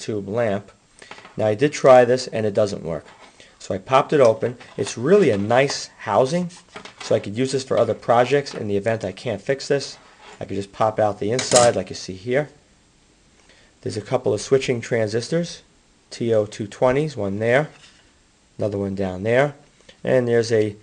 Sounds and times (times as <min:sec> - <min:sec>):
Speech: 0:00.0 - 0:00.8, 0:01.4 - 0:12.6, 0:13.8 - 0:17.8, 0:18.6 - 0:20.8
Inside, small room: 0:00.0 - 0:20.8.